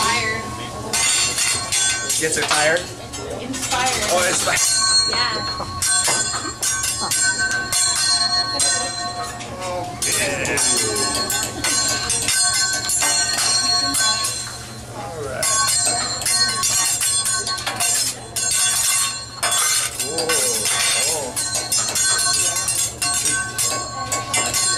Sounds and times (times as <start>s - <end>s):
Tubular bells: 0.0s - 3.0s, 3.6s - 24.7s.